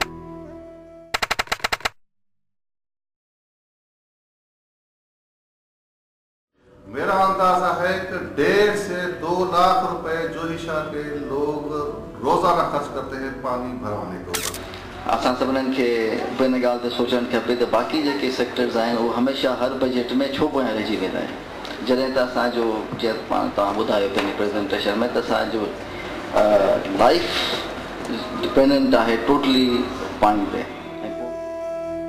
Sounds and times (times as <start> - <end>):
Speech: 6.9 - 14.4, 15.1 - 31.4.